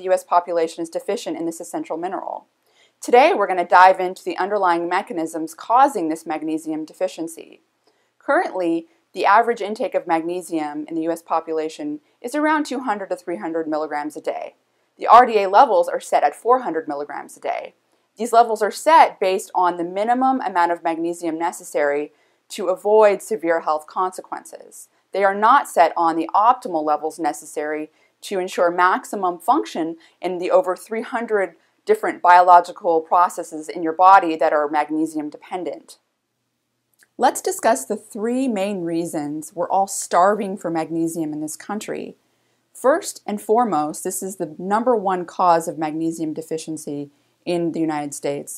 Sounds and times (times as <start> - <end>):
Speech: 0.0 - 2.4, 3.0 - 7.6, 8.3 - 36.0, 37.0 - 42.2, 42.8 - 48.5.